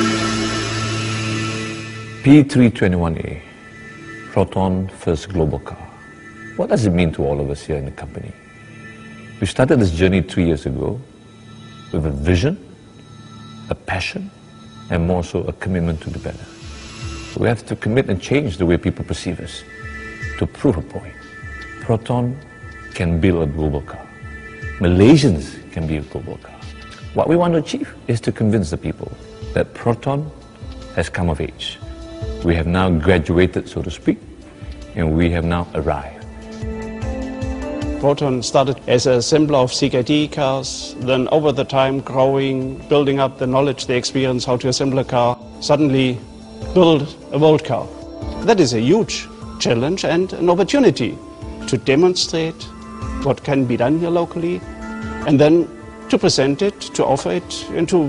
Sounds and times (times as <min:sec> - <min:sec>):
Music: 0:00.0 - 0:58.0
Speech: 0:02.2 - 0:03.5, 0:04.3 - 0:06.0, 0:06.6 - 0:08.4, 0:09.4 - 0:11.1, 0:11.9 - 0:12.6, 0:13.7 - 0:14.3, 0:14.9 - 0:16.5, 0:17.4 - 0:19.7, 0:20.4 - 0:21.1, 0:21.8 - 0:22.4, 0:23.0 - 0:24.1, 0:24.8 - 0:30.4, 0:31.0 - 0:31.8, 0:32.4 - 0:34.3, 0:35.0 - 0:36.3, 0:38.0 - 0:54.6, 0:55.2 - 0:58.0.